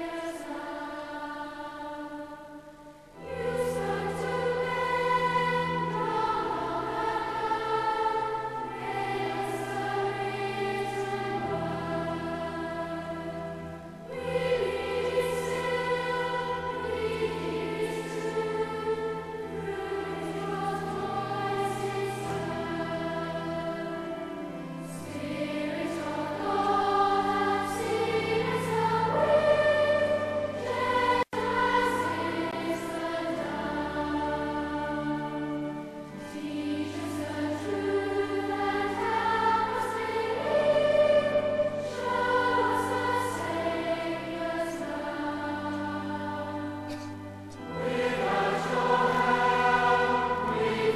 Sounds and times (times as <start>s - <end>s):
Music: 0.0s - 50.9s.